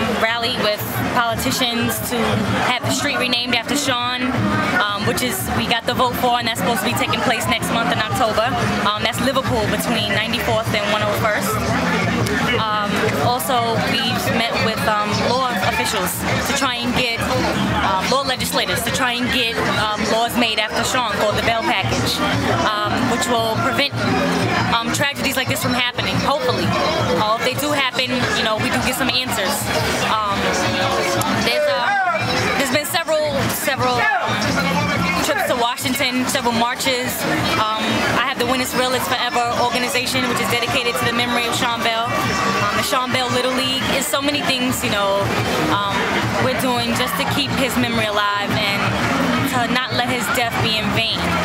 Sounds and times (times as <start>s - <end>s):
Music: 0.0s - 51.4s
Speech: 0.0s - 51.4s.